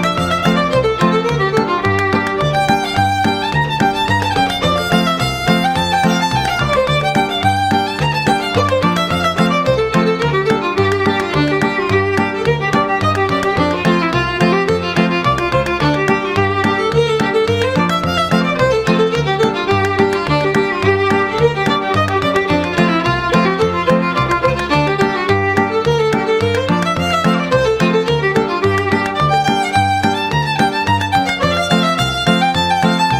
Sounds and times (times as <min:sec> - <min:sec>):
Violin, fiddle: 0:00.0 - 0:33.1.